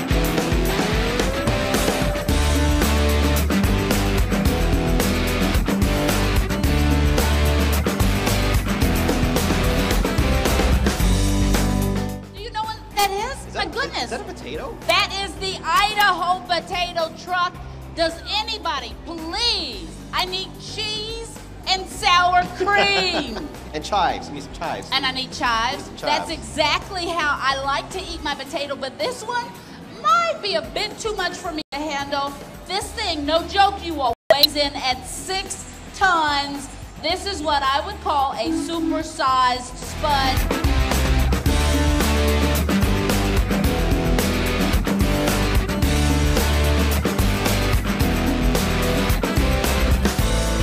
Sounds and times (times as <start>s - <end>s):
Music: 0.0s - 50.6s.